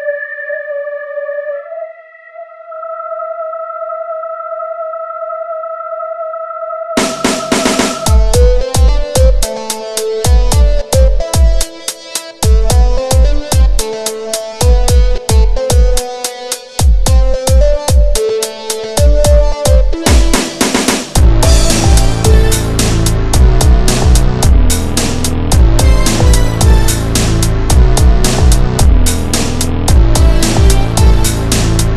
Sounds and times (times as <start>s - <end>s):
Music: 0.0s - 3.6s, 6.9s - 31.9s.